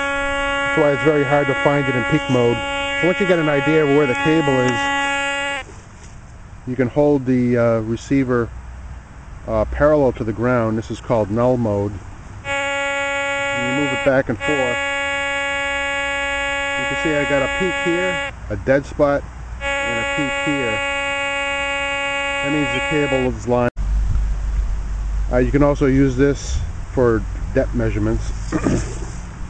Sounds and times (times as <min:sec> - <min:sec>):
Outside, urban or manmade: 0:00.0 - 0:29.4
Speech: 0:00.8 - 0:04.9, 0:06.7 - 0:08.5, 0:09.5 - 0:12.0, 0:13.5 - 0:14.8, 0:16.8 - 0:19.2, 0:19.9 - 0:20.8, 0:22.4 - 0:23.7, 0:25.3 - 0:28.8.